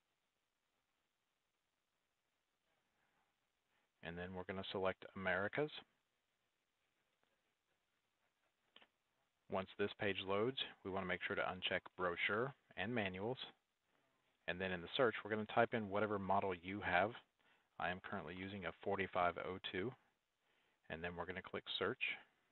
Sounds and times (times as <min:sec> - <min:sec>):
Speech: 0:04.0 - 0:06.0, 0:09.5 - 0:13.7, 0:14.4 - 0:20.1, 0:20.9 - 0:22.4.